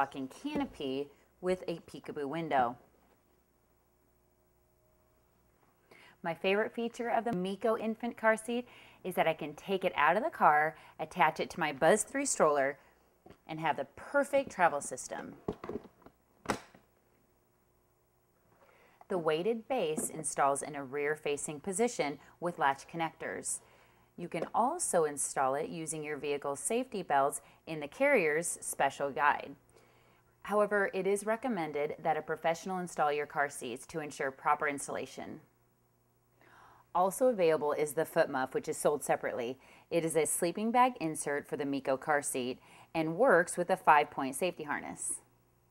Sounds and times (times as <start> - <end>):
Speech: 0.0 - 2.8, 6.2 - 12.8, 13.5 - 15.4, 19.1 - 23.6, 24.2 - 29.6, 30.5 - 35.5, 37.0 - 45.3.